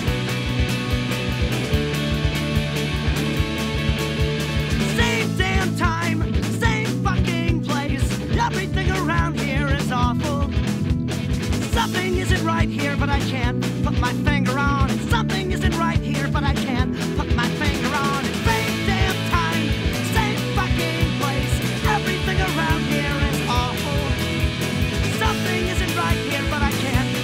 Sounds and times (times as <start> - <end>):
Music: 0.0 - 27.2.